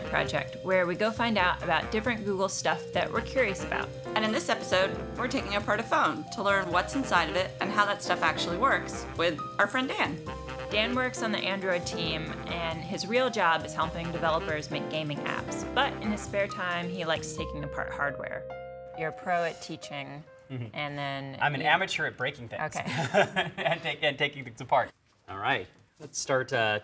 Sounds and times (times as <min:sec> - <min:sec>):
Music: 0:00.0 - 0:23.3.